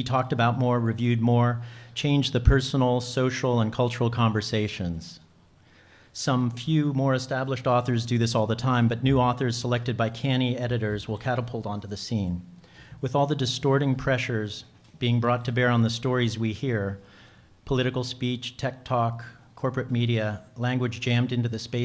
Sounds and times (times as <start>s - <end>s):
Speech: 0.0s - 5.3s, 6.1s - 21.8s.